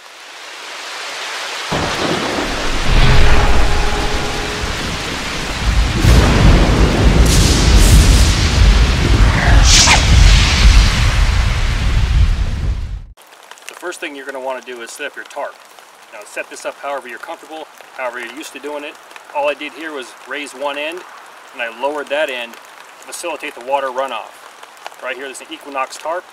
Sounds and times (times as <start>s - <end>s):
Raindrop: 0.0s - 11.7s, 13.1s - 26.3s
Speech: 13.8s - 24.4s, 25.0s - 26.3s.